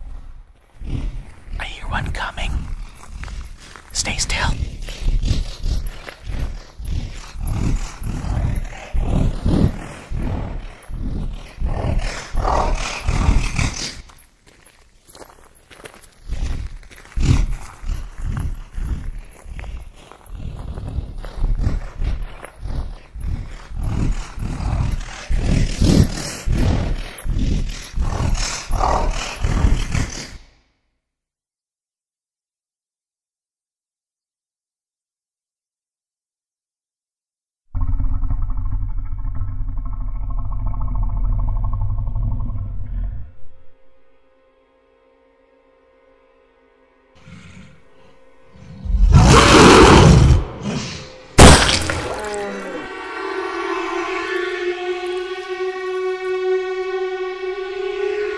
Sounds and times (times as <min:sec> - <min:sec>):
Music: 0:43.3 - 0:51.4.